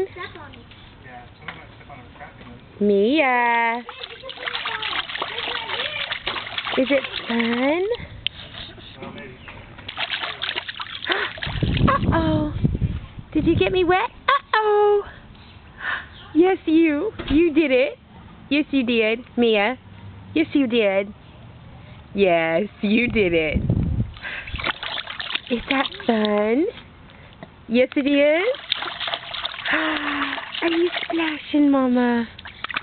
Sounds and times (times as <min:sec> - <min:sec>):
Water: 0:02.8 - 0:12.6, 0:24.1 - 0:26.7, 0:27.8 - 0:32.8.